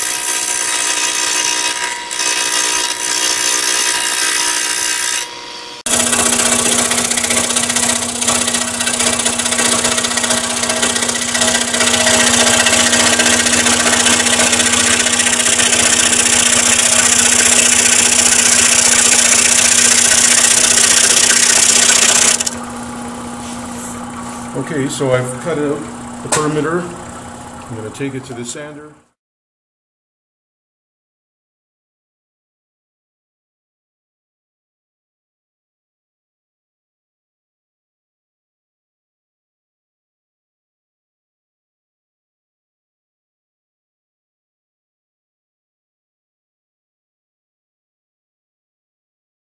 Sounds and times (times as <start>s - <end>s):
Sewing machine: 0.0s - 5.3s, 5.9s - 22.6s.